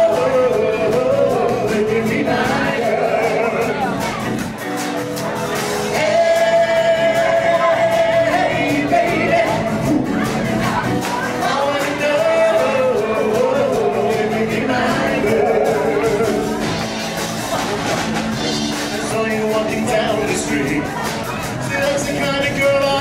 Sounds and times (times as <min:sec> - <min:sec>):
Rock and roll: 0:00.0 - 0:23.0.